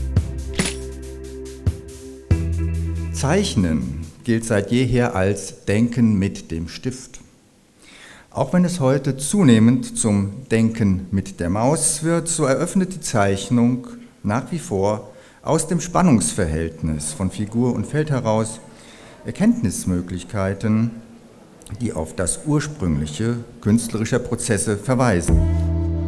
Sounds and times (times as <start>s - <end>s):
Speech: 3.2s - 7.3s, 8.3s - 25.4s.